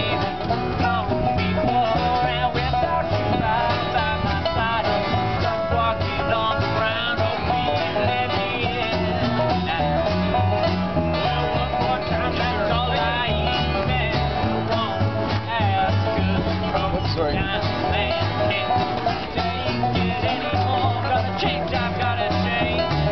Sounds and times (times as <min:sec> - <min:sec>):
Bluegrass: 0:00.0 - 0:23.1.